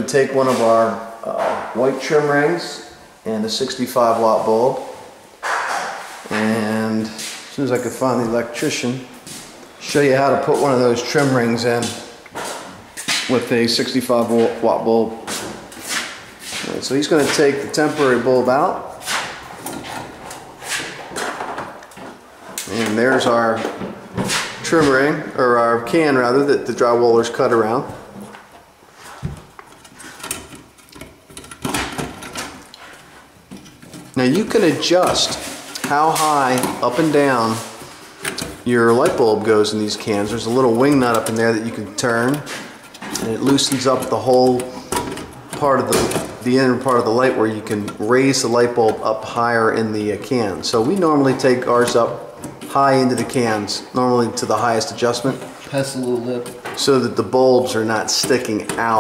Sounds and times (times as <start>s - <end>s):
Speech: 0.0s - 5.0s, 6.3s - 9.1s, 9.8s - 12.1s, 13.2s - 15.3s, 16.7s - 18.9s, 22.6s - 23.8s, 24.6s - 28.0s, 34.2s - 37.7s, 38.6s - 42.6s, 43.2s - 44.7s, 45.5s - 59.0s
Inside, small room: 0.0s - 59.0s.